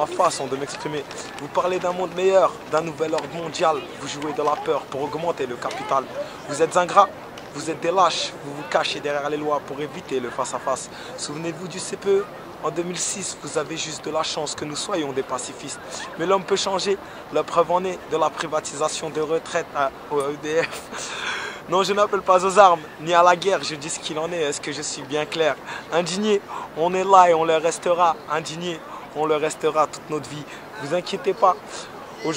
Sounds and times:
Speech: 0:00.0 - 0:20.8, 0:21.7 - 0:32.3.

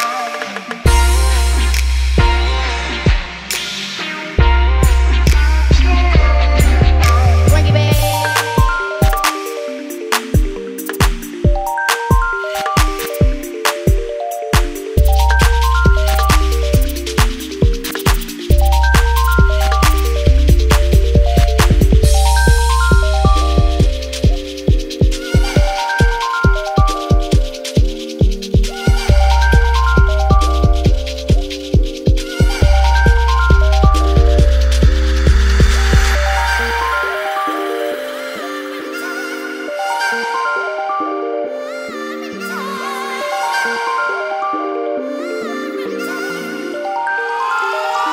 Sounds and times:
Music: 0:00.0 - 0:48.1.

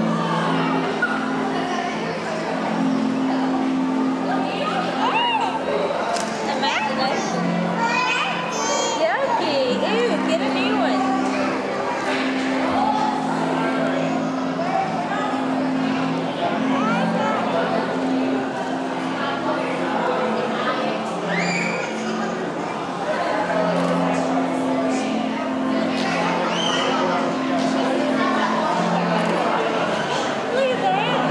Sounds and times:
Speech: 0:00.0 - 0:31.3.

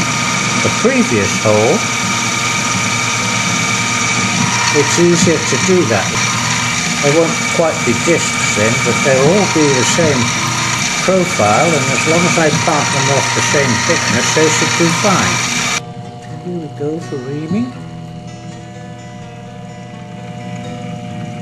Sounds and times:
Speech: 0:00.7 - 0:01.9, 0:04.7 - 0:06.2, 0:07.0 - 0:10.3, 0:11.0 - 0:15.4, 0:16.2 - 0:17.8.

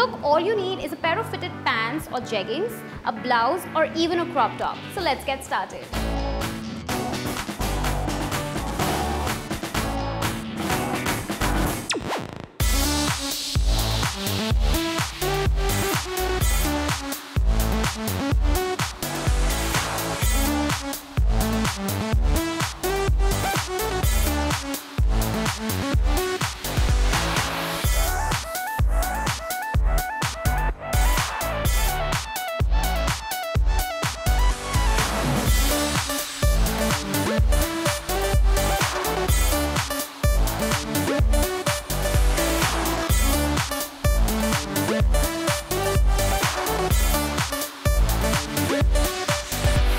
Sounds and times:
Music: 0:00.0 - 0:49.9.

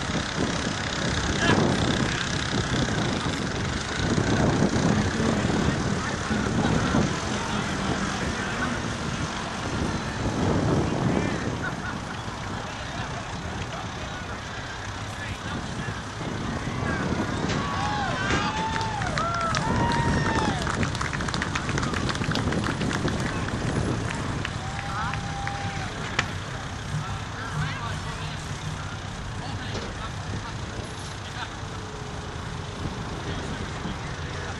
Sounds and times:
Vehicle: 0:00.0 - 0:34.5
Speech: 0:12.6 - 0:16.1, 0:26.9 - 0:31.8, 0:33.1 - 0:34.5.

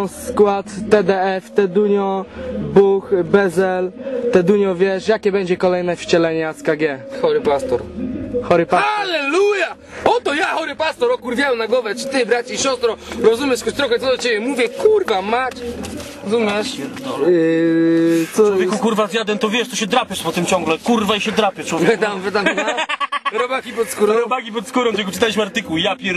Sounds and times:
Speech: 0:00.0 - 0:07.9, 0:08.5 - 0:22.7, 0:23.3 - 0:26.1.

